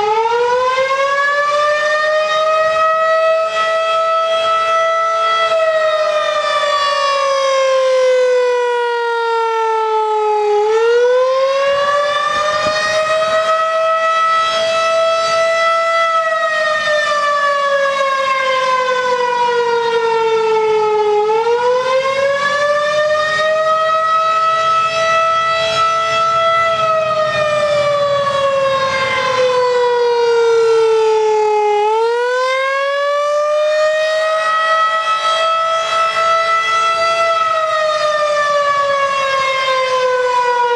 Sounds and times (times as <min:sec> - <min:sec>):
Civil defense siren: 0:00.0 - 0:40.7.